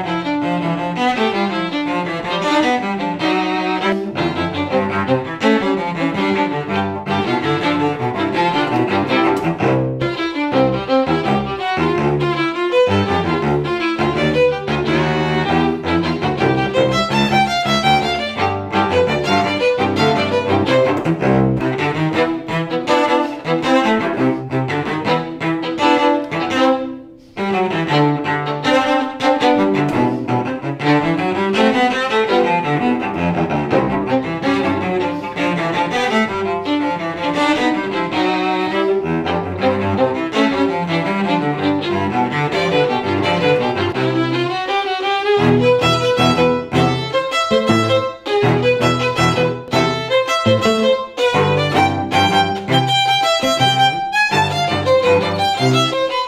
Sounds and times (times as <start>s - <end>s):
Cello: 0.0s - 56.2s
Violin, fiddle: 0.0s - 56.2s.